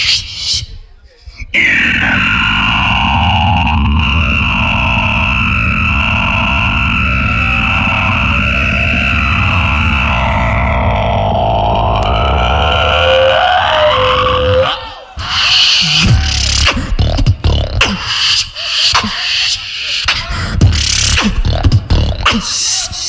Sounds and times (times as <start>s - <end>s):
Music: 13.6s - 23.0s.